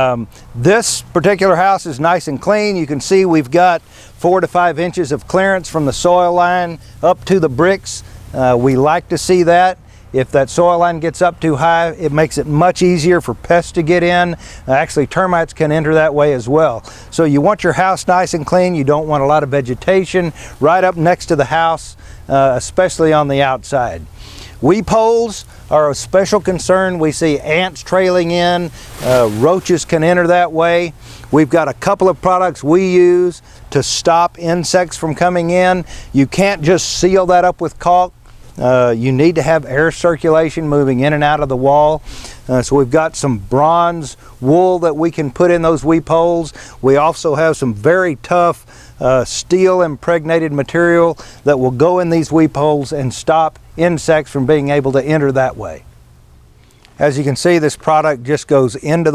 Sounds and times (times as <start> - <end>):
Speech: 0.0 - 55.8, 57.0 - 59.1.